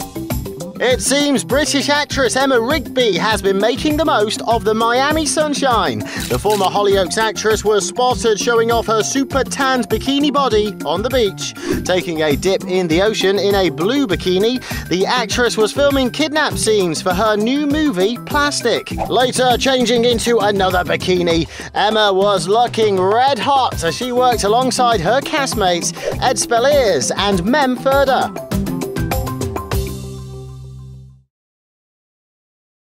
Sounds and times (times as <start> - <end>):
Music: 0.0 - 31.3
Speech: 0.8 - 28.3.